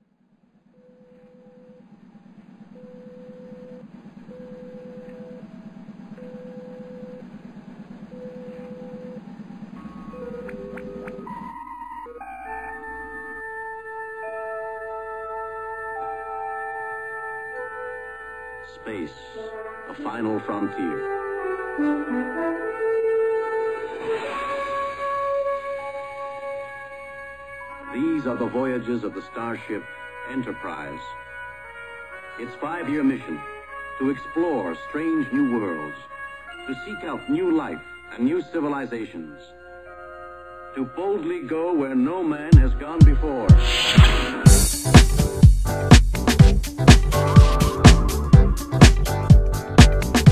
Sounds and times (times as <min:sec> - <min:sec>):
Theme music: 0:05.4 - 0:41.8, 0:42.8 - 0:50.3
Speech: 0:18.7 - 0:21.0, 0:27.9 - 0:31.2, 0:32.4 - 0:33.4, 0:34.0 - 0:36.1, 0:36.7 - 0:39.5, 0:40.8 - 0:43.6.